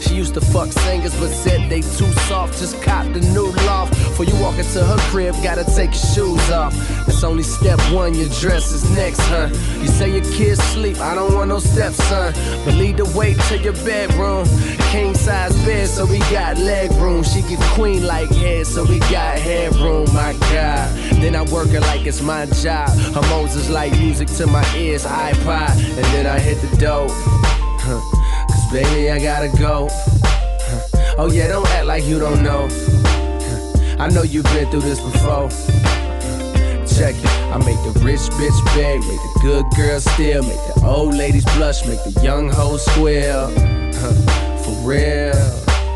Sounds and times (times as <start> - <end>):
Music: 0.0 - 45.9.